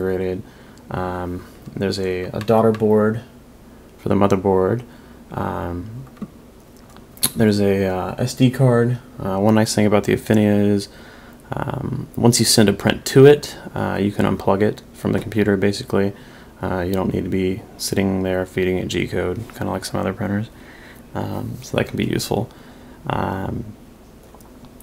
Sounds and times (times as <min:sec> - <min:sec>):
Speech: 0:00.0 - 0:03.3, 0:04.0 - 0:06.1, 0:07.2 - 0:10.9, 0:11.5 - 0:20.6, 0:21.2 - 0:23.8.